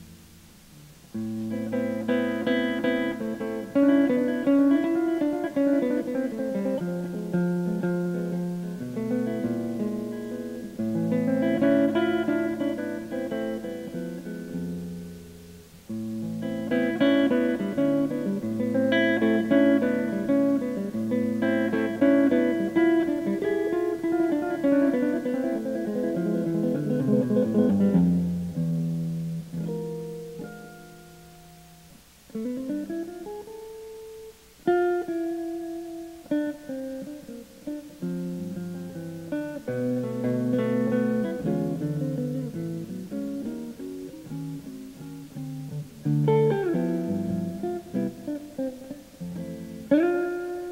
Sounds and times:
Acoustic guitar: 0.0s - 50.7s
Electric guitar: 0.0s - 50.7s.

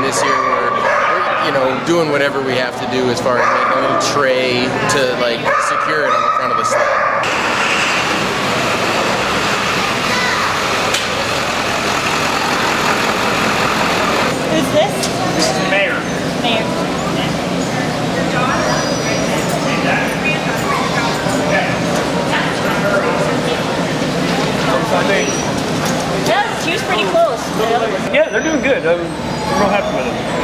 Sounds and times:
Truck: 7.2s - 15.2s.

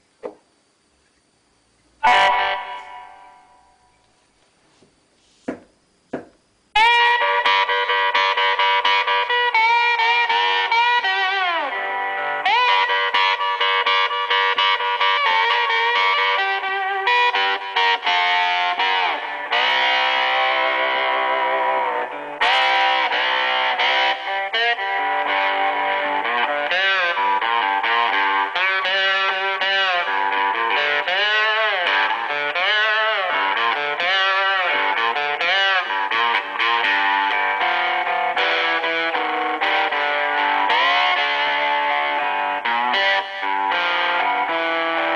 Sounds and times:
Guitar: 0.0s - 45.1s.

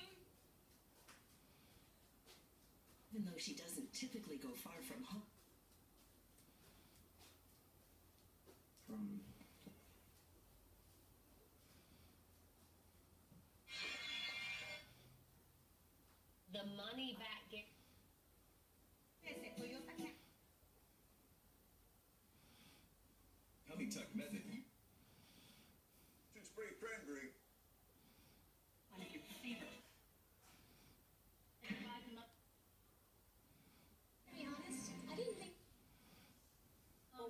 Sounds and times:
Television: 0.0s - 37.3s
Speech: 3.1s - 5.3s.

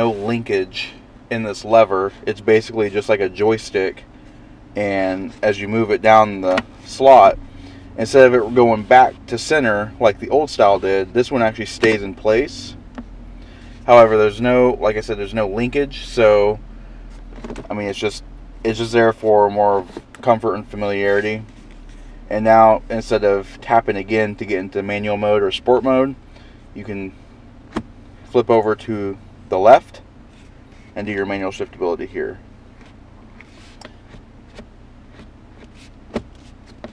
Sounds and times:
Vehicle: 0.0s - 36.9s.

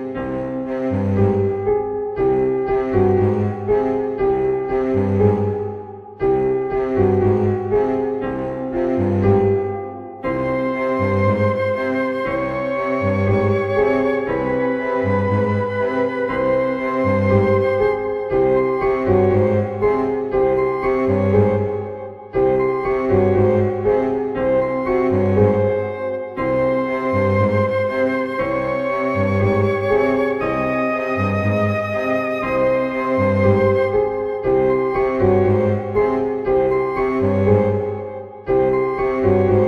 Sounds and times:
Double bass: 0.0s - 21.8s
Cello: 0.0s - 39.6s.

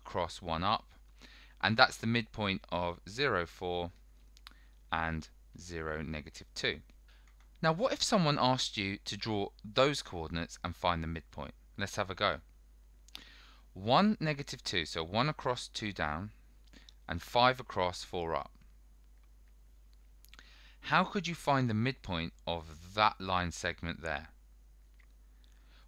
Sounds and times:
Speech: 0.0s - 1.0s, 1.6s - 4.0s, 4.9s - 6.9s, 7.6s - 12.5s, 13.8s - 16.4s, 17.1s - 18.6s, 20.8s - 24.4s
Inside, small room: 0.0s - 25.8s.

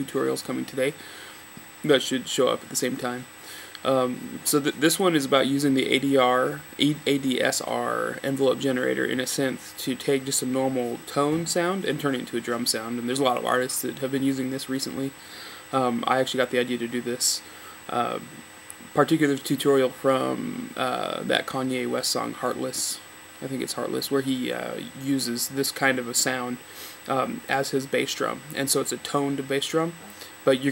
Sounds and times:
Speech: 0.0s - 1.0s, 1.8s - 30.7s.

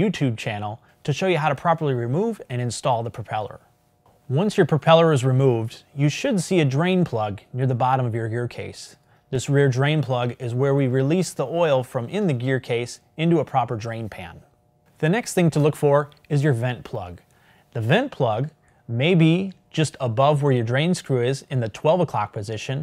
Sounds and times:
Speech: 0.0s - 3.7s, 4.3s - 22.8s.

